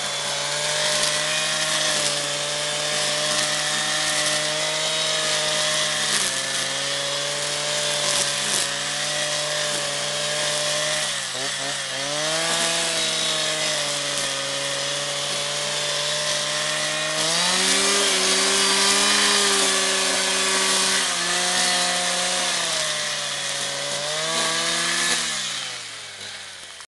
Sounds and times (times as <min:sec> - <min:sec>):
Power tool: 0:00.0 - 0:26.8.